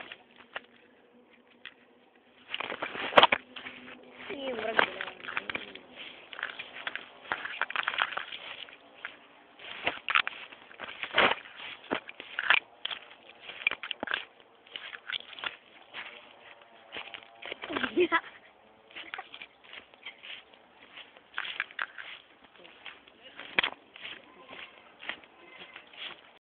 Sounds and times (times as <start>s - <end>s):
Speech: 4.2s - 5.8s, 22.6s - 23.6s
Bleat: 24.2s - 26.0s.